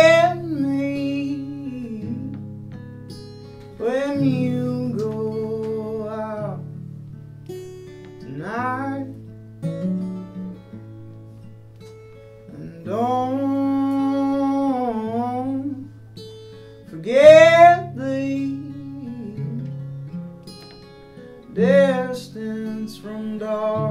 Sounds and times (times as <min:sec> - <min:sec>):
Music: 0:00.0 - 0:23.9.